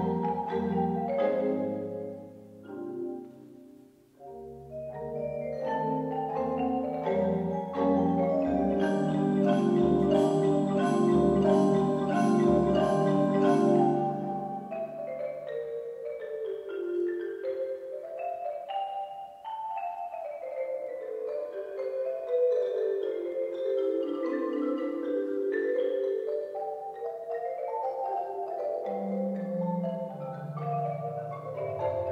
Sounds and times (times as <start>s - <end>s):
Marimba, xylophone: 0.0s - 32.1s.